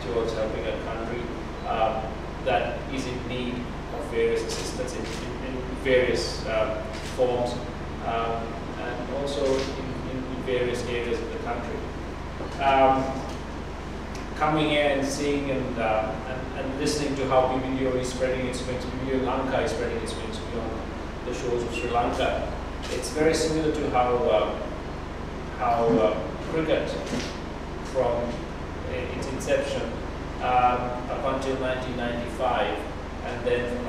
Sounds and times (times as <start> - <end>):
Male speech, man speaking: 0.0 - 11.9, 12.6 - 13.3, 14.4 - 24.7, 25.6 - 27.2, 27.9 - 33.8
Narration, monologue: 0.0 - 33.8.